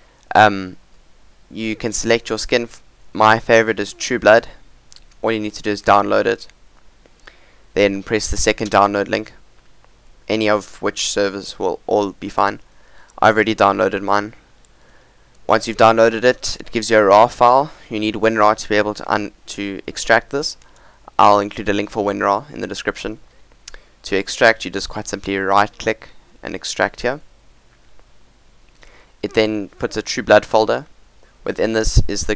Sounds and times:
Speech: 0.3 - 0.8, 1.5 - 4.6, 5.2 - 6.5, 7.8 - 9.4, 10.3 - 12.6, 13.2 - 14.4, 15.5 - 20.6, 21.2 - 23.2, 24.0 - 27.3, 29.2 - 32.3.

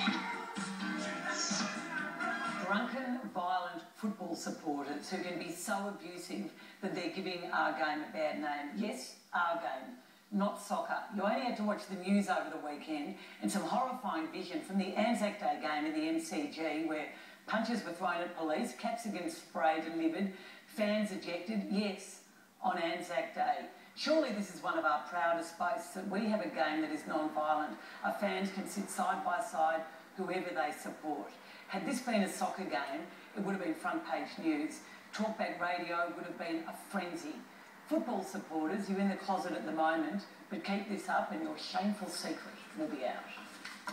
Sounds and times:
Speech: 2.6 - 43.6.

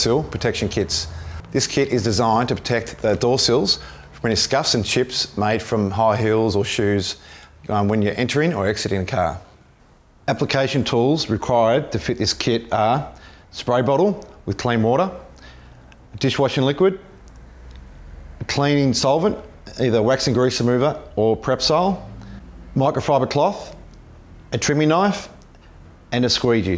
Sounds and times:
Speech: 0.0 - 9.6, 10.3 - 15.3, 16.1 - 17.2, 18.4 - 22.1, 22.8 - 23.9, 24.5 - 25.4, 26.1 - 26.7.

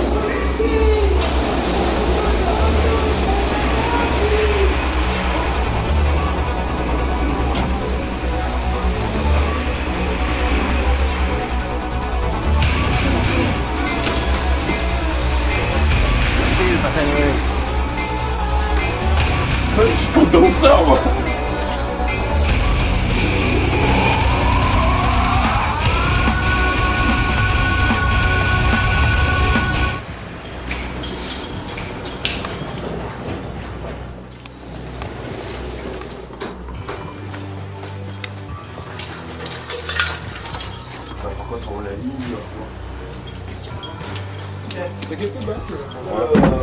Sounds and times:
Music: 0.0 - 46.6
Speech: 16.5 - 17.4, 19.8 - 21.3.

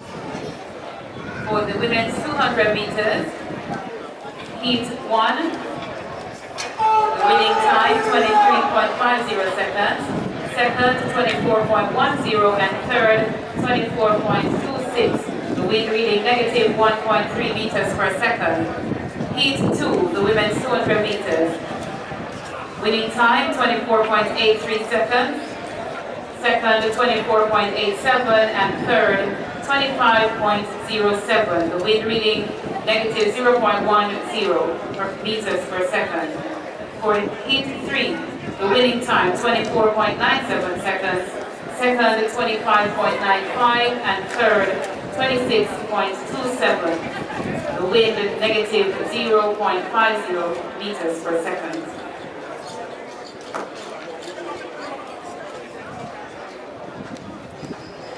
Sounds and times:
Outside, urban or manmade: 0.0 - 58.1
Speech: 0.8 - 21.6, 22.4 - 25.6, 26.4 - 53.1.

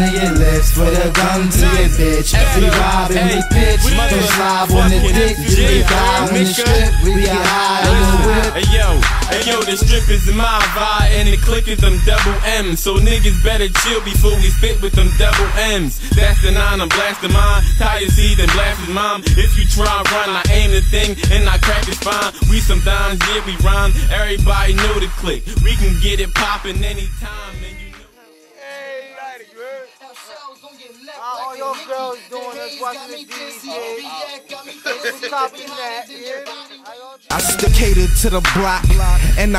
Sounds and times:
Funk: 0.0 - 12.4.

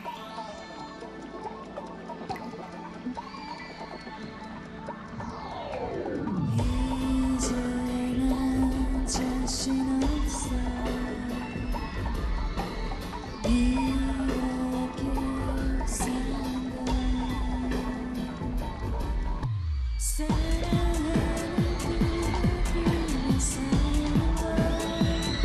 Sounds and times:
Exciting music: 0.0 - 25.4.

